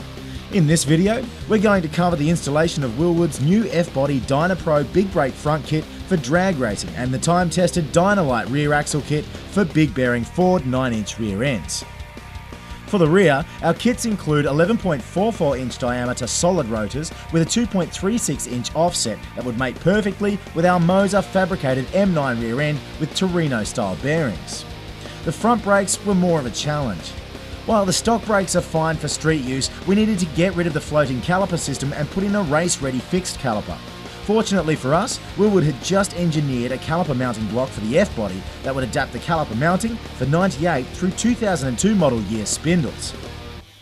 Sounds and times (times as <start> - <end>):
Speech: 0.0 - 11.9, 12.9 - 43.2
Music: 0.0 - 43.8.